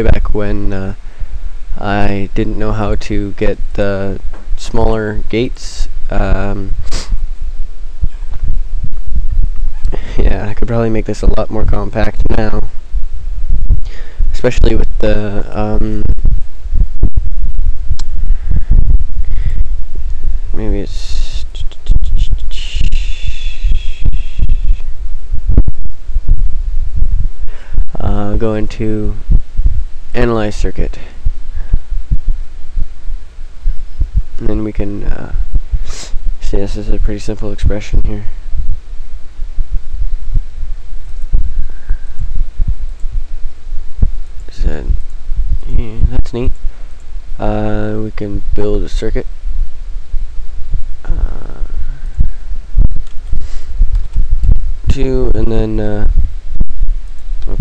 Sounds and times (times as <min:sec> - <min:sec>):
Speech: 0:00.0 - 0:01.0, 0:01.8 - 0:07.1, 0:09.9 - 0:12.7, 0:14.3 - 0:16.1, 0:20.5 - 0:24.8, 0:27.9 - 0:29.2, 0:30.2 - 0:31.2, 0:34.4 - 0:38.4, 0:44.5 - 0:45.0, 0:45.6 - 0:46.6, 0:47.4 - 0:49.3, 0:51.1 - 0:51.8, 0:54.9 - 0:56.2
Inside, small room: 0:00.0 - 0:57.6.